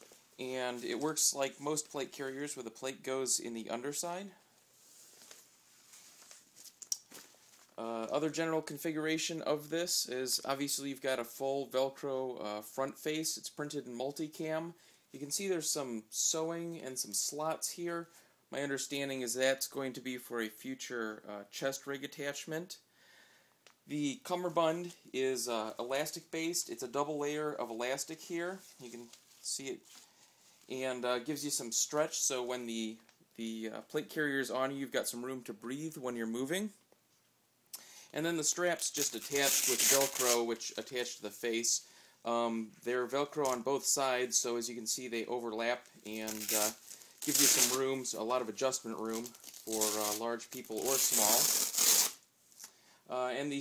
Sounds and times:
Speech: 0.4 - 4.4, 7.8 - 22.8, 23.9 - 29.9, 30.7 - 36.8, 38.2 - 51.6, 53.1 - 53.6.

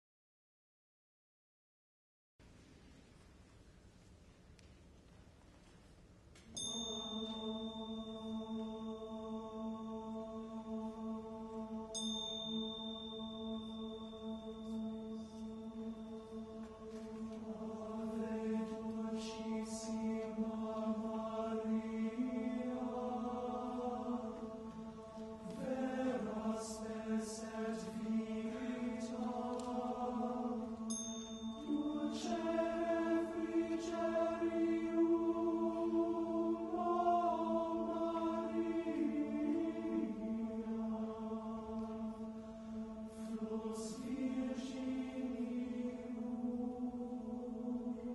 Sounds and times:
Choir: 6.5 - 48.1
Male singing: 6.8 - 42.2.

